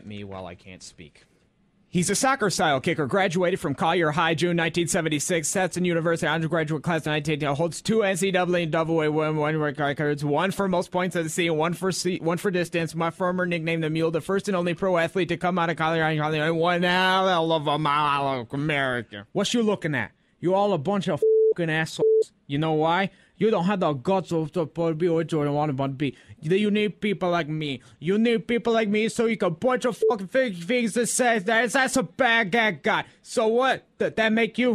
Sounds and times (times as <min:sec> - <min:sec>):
Male speech, man speaking: 0:00.0 - 0:01.2, 0:01.9 - 0:34.7
Narration, monologue: 0:00.0 - 0:34.7.